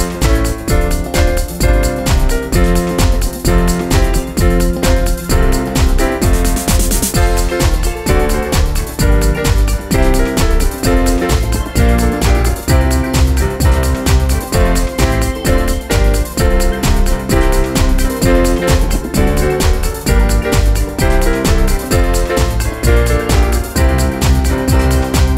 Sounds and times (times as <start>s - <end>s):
Techno: 0.0s - 25.3s.